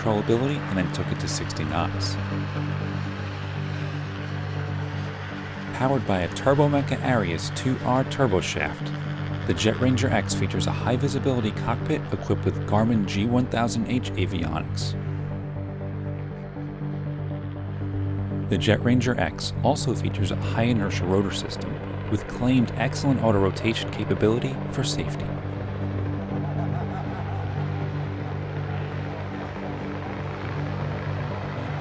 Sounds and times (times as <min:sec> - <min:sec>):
Speech: 0:00.0 - 0:02.2, 0:05.8 - 0:15.0, 0:18.5 - 0:25.4
Music: 0:00.0 - 0:31.8.